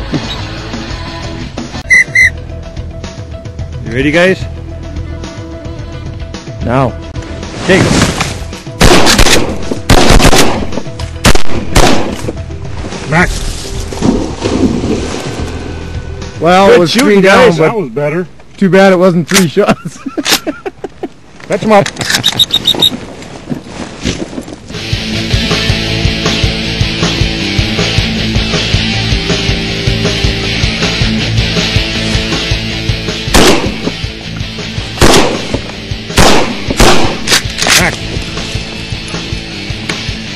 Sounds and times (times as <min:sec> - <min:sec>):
Speech: 0:16.4 - 0:19.8, 0:21.5 - 0:21.9.